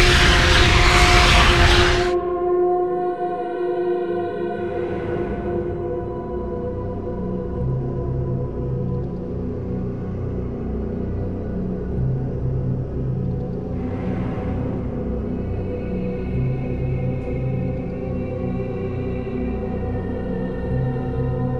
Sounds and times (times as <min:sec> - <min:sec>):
Scary music: 0:00.0 - 0:21.5.